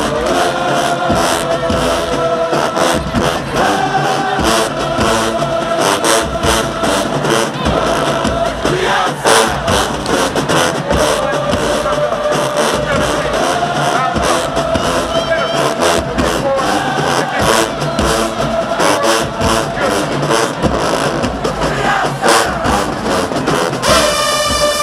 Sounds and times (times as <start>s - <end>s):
Music: 0.0s - 24.8s
Speech: 10.9s - 17.8s.